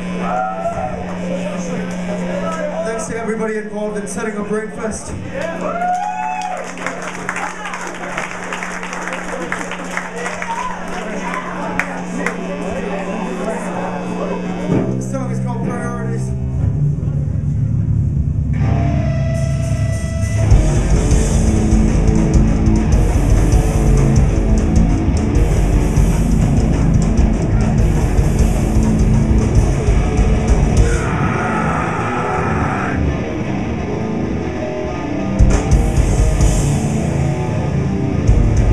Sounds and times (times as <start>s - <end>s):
Music: 14.0s - 38.7s.